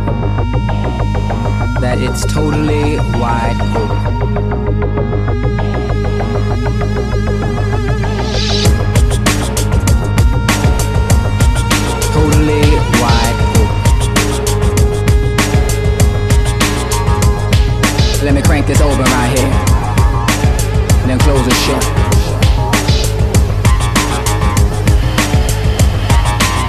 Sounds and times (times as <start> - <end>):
Drum and bass: 0.0 - 26.6.